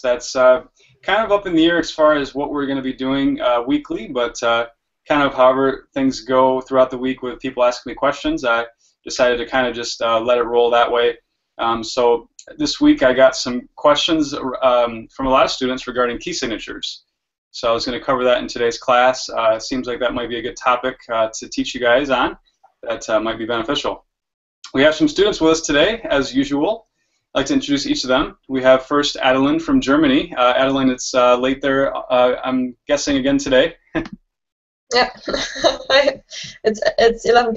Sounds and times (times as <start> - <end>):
Speech: 0.0 - 17.0, 17.6 - 24.0, 24.7 - 26.8, 27.4 - 34.2, 34.9 - 37.5.